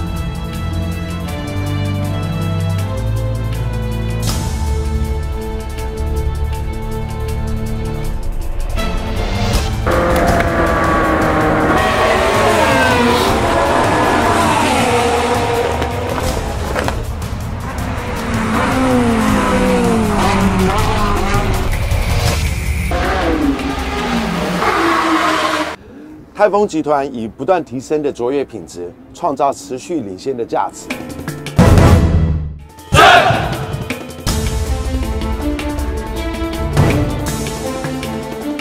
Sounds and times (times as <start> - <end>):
Race car, auto racing: 9.8 - 25.8
Speech: 26.4 - 31.0.